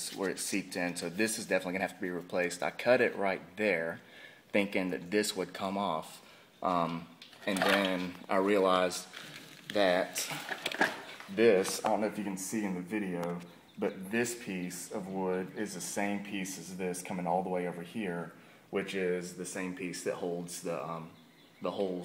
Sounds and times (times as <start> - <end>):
Speech: 0.0 - 9.1, 9.7 - 10.4, 11.3 - 22.0.